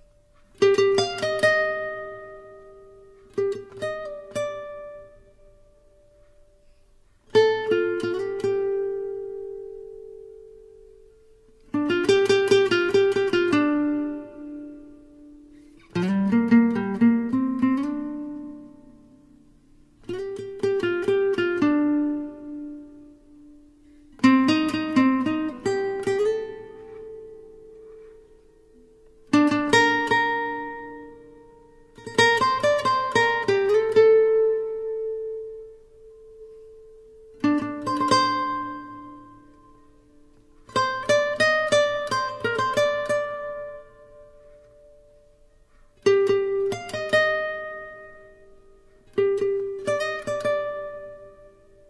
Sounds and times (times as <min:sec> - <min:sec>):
Music: 0:00.0 - 0:51.8.